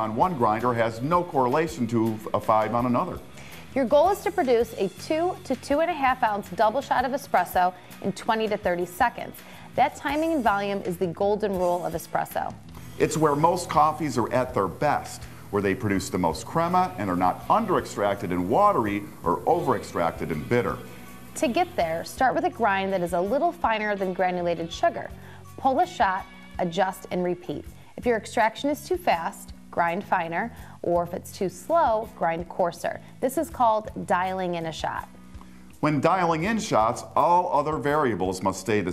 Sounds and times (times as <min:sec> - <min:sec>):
Speech: 0:00.0 - 0:03.2, 0:03.8 - 0:20.8, 0:21.4 - 0:35.0, 0:35.8 - 0:38.9
Music: 0:00.0 - 0:38.9.